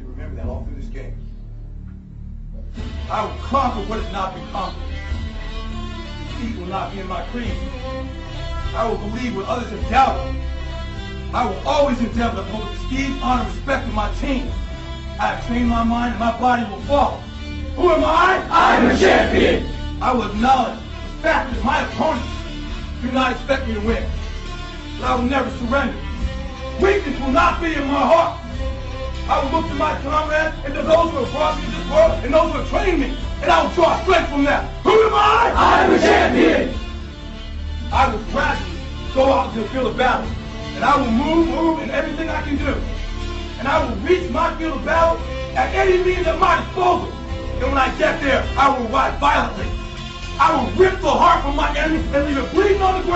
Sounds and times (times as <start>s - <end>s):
Male speech, man speaking: 0.0s - 1.2s, 3.0s - 5.0s, 6.3s - 7.7s, 8.8s - 10.4s, 11.3s - 14.6s, 15.2s - 17.2s, 17.8s - 22.4s, 23.0s - 24.1s, 25.0s - 26.1s, 26.8s - 28.4s, 29.3s - 36.8s, 37.9s - 42.9s, 43.6s - 49.8s, 50.4s - 53.1s
Music: 0.0s - 53.1s.